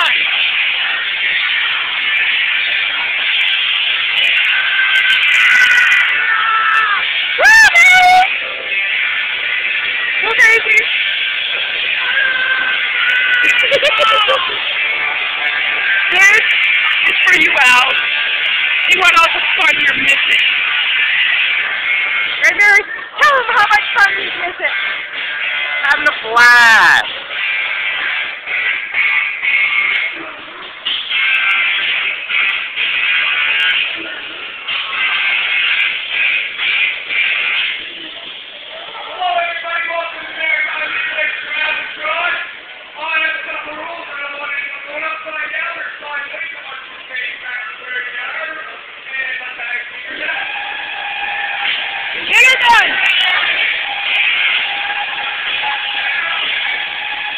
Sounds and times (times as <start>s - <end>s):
Music: 0.0s - 57.3s.